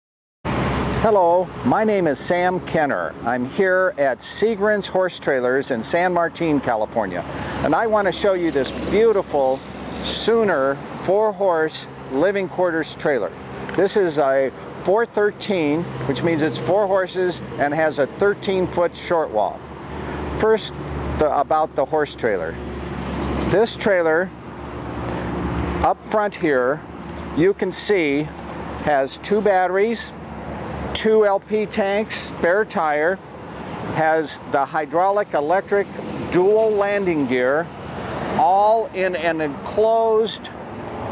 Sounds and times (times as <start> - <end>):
Speech: 1.1 - 19.6, 20.4 - 22.6, 23.5 - 24.3, 25.8 - 26.8, 27.4 - 30.2, 31.0 - 33.2, 34.0 - 37.7, 38.4 - 40.6.